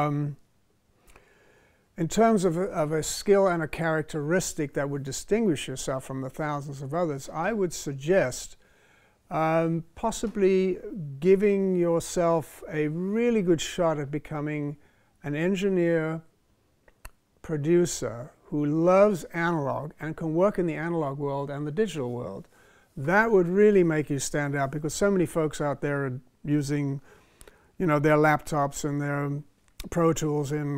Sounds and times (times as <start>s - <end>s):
Speech: 0.0s - 0.4s, 2.0s - 8.6s, 9.3s - 16.3s, 17.4s - 27.0s, 27.8s - 30.7s.